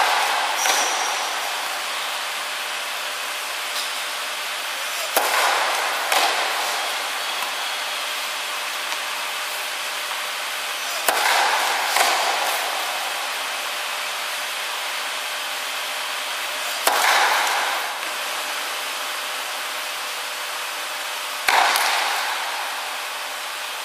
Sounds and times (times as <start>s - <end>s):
Inside, large room or hall: 0.0s - 23.8s.